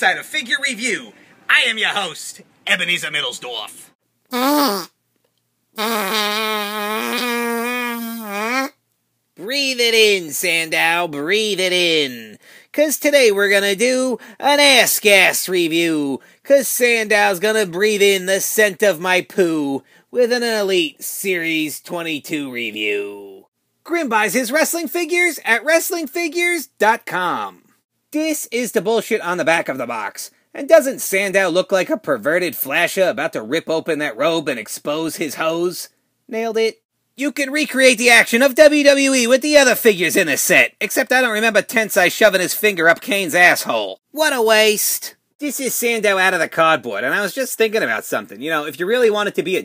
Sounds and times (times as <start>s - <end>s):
Speech: 0.0s - 4.0s, 9.4s - 49.6s.